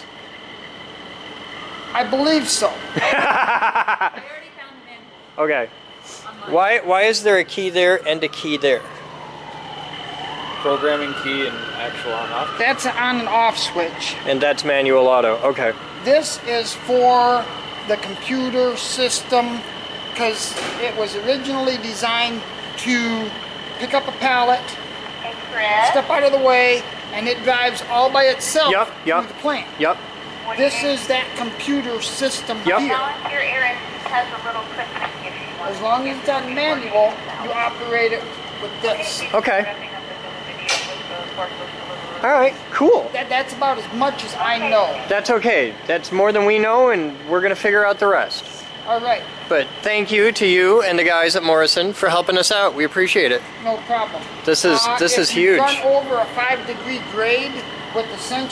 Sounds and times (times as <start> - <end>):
Ambulance (siren): 0.0 - 3.6, 6.3 - 58.3.